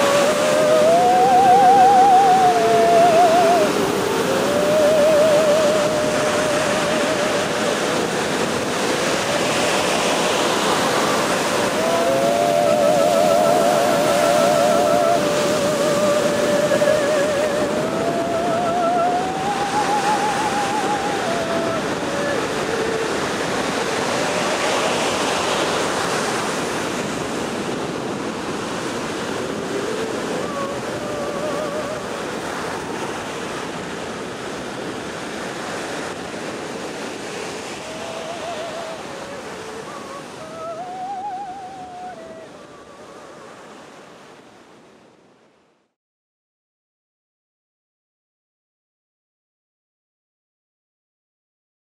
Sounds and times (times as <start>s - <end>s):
Waves, surf: 0.0s - 46.0s.